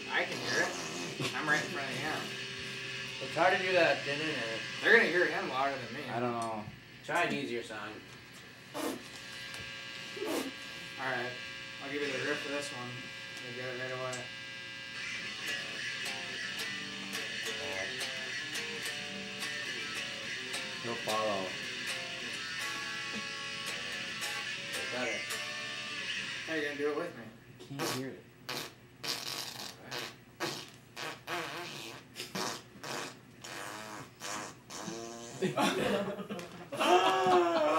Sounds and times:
Guitar: 0:00.0 - 0:37.7
Fart: 0:00.1 - 0:02.2, 0:08.7 - 0:09.1, 0:10.1 - 0:10.6, 0:27.6 - 0:35.6.

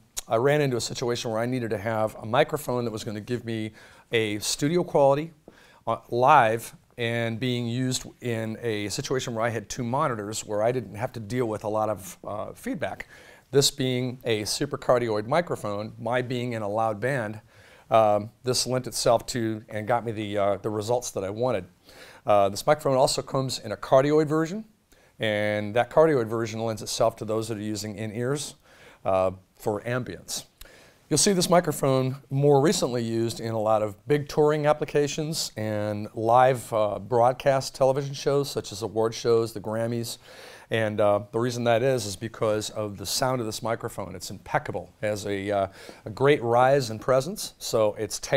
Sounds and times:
Speech: 0:00.0 - 0:30.5, 0:31.1 - 0:48.3.

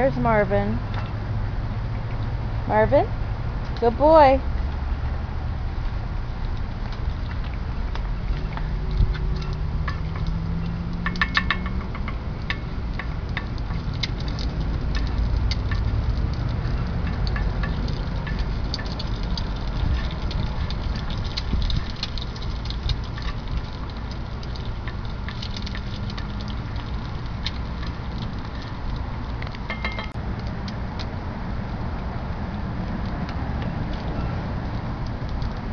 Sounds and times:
Outside, urban or manmade: 0:00.0 - 0:35.7.

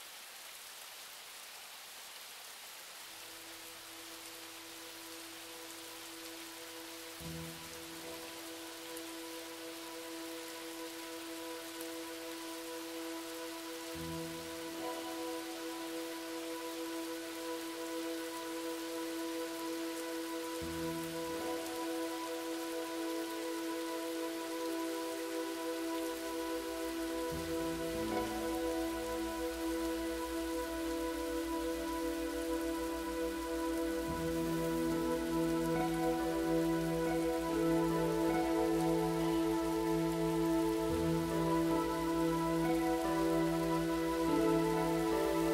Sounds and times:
Rain on surface: 0:00.0 - 0:45.5
Music: 0:03.2 - 0:45.5.

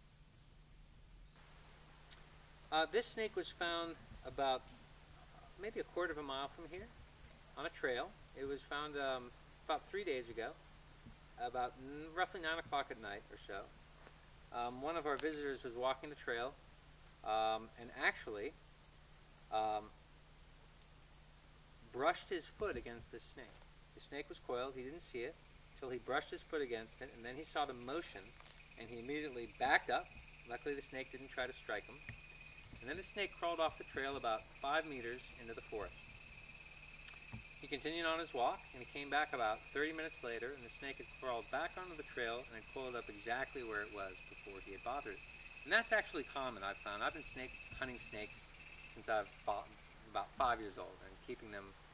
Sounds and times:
Outside, rural or natural: 0:00.0 - 0:51.9
Speech: 0:02.7 - 0:07.0, 0:07.6 - 0:10.6, 0:11.4 - 0:13.7, 0:14.5 - 0:16.6, 0:17.2 - 0:18.6, 0:19.5 - 0:20.0, 0:21.9 - 0:32.0, 0:32.8 - 0:36.0, 0:37.6 - 0:51.8.

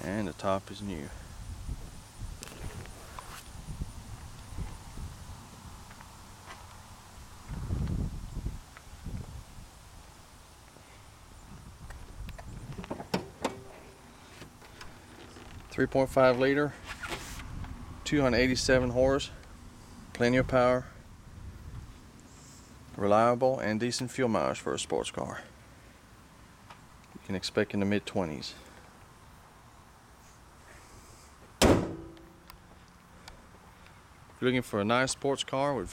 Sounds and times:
Outside, rural or natural: 0:00.0 - 0:35.9.

